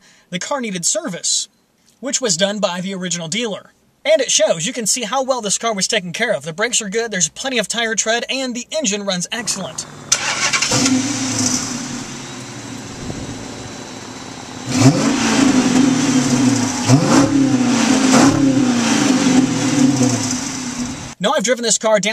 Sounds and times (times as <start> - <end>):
Speech: 0.3 - 9.9, 21.2 - 22.1
Car: 9.4 - 21.2.